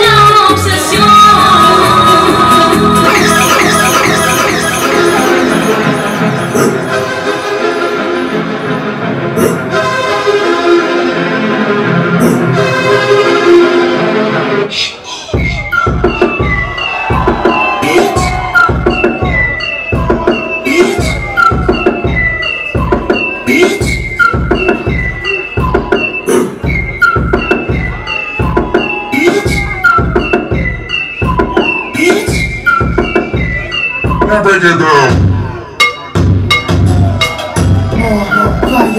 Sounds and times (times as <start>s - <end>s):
Music: 0.0s - 38.9s.